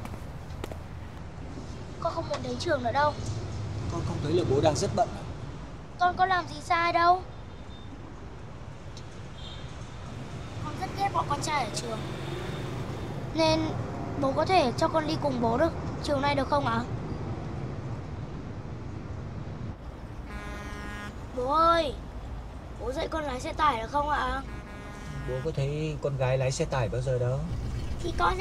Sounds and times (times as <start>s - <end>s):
Vehicle: 0.0s - 28.4s.